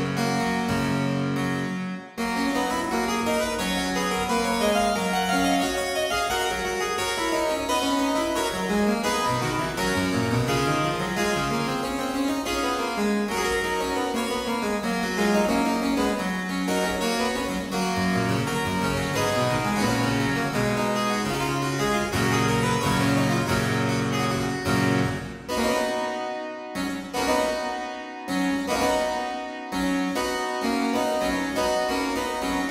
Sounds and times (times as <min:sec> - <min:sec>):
Harpsichord: 0:00.0 - 0:32.7.